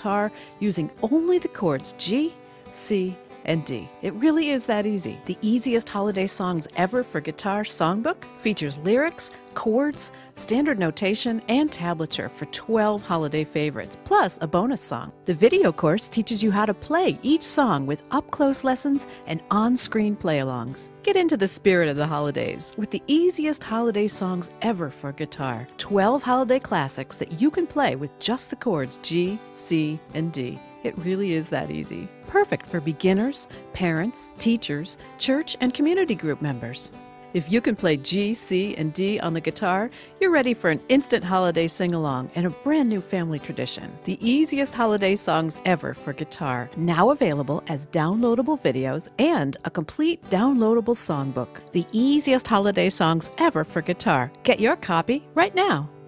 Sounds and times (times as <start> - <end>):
Speech: 0.0 - 55.9.